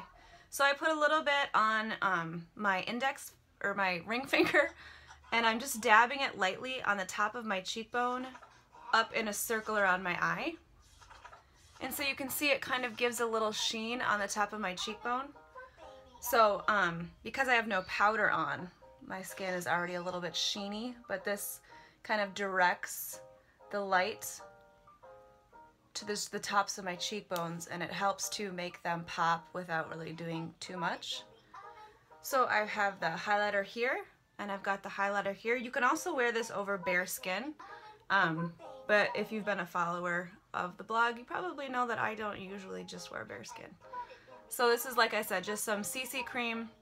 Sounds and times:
Inside, small room: 0:00.0 - 0:46.8.

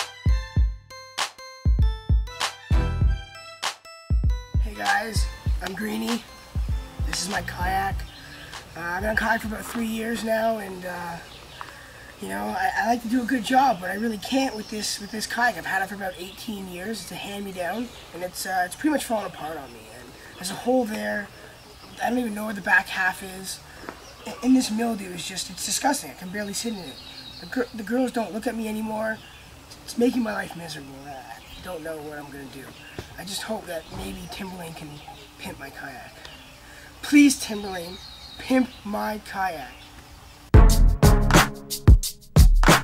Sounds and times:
Speech: 0:04.6 - 0:06.3, 0:07.0 - 0:08.1, 0:08.8 - 0:11.3, 0:12.2 - 0:23.6, 0:24.2 - 0:29.2, 0:29.8 - 0:36.2, 0:37.0 - 0:39.8.

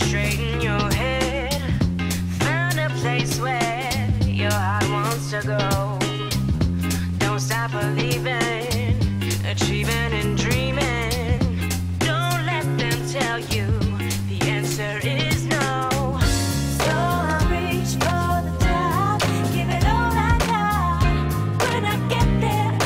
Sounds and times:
Dance music: 0:00.0 - 0:22.8
Pop music: 0:00.0 - 0:22.8.

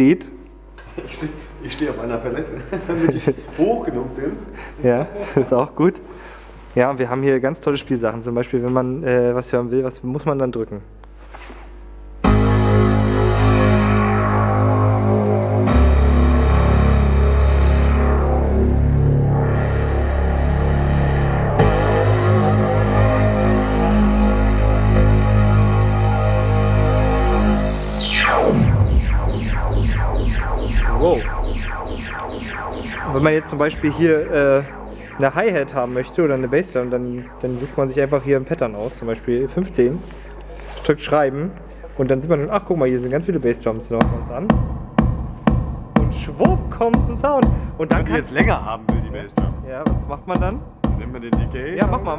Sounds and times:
Speech: 0:00.0 - 0:06.1, 0:06.8 - 0:10.9, 0:33.1 - 0:44.5, 0:46.0 - 0:52.1
Techno: 0:12.2 - 0:40.5, 0:44.0 - 0:52.1.

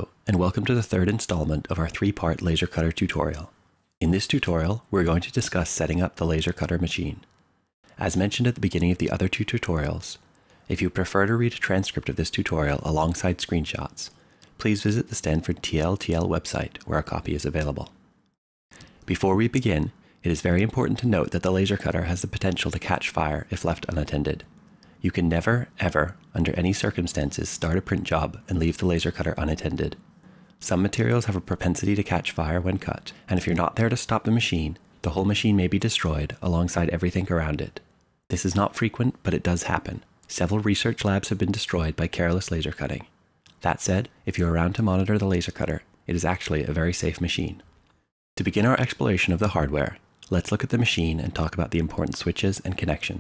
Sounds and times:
Speech: 0:00.0 - 0:07.3, 0:07.9 - 0:18.0, 0:19.0 - 0:30.0, 0:30.6 - 0:47.7, 0:48.4 - 0:53.2.

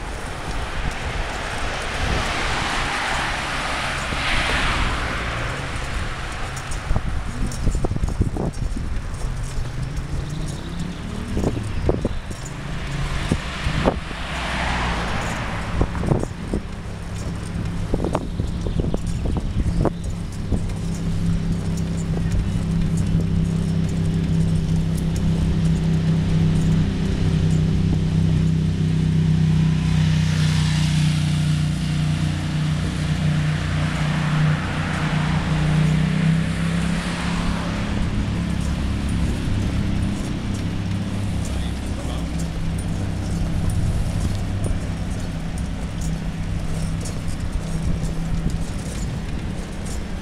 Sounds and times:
Vehicle: 0:00.0 - 0:50.2.

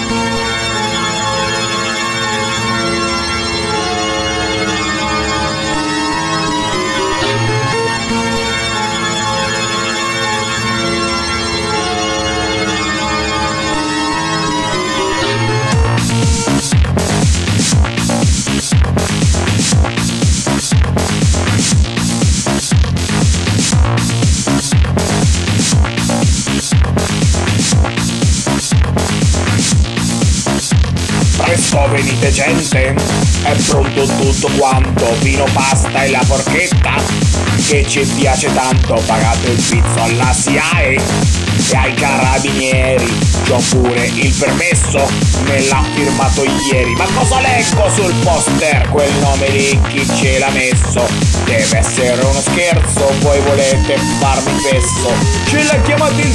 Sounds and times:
Trance music: 0:00.0 - 0:56.3.

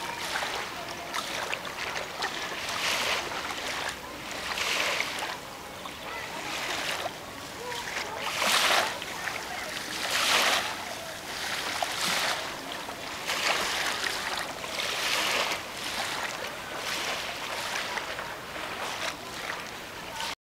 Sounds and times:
Speech: 0:00.0 - 0:20.4.

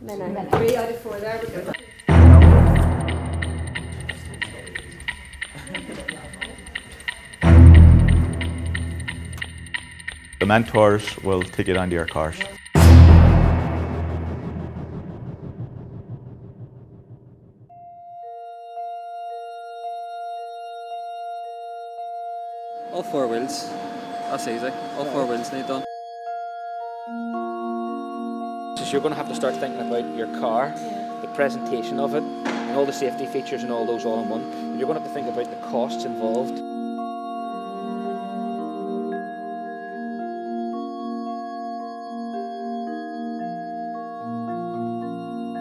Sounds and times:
Music: 0:00.7 - 0:45.6
Speech: 0:10.4 - 0:12.6, 0:28.8 - 0:36.6.

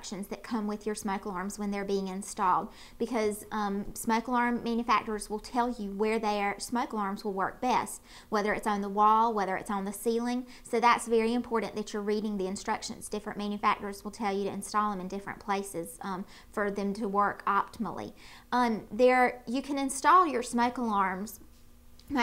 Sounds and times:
Speech: 0:00.0 - 0:21.4.

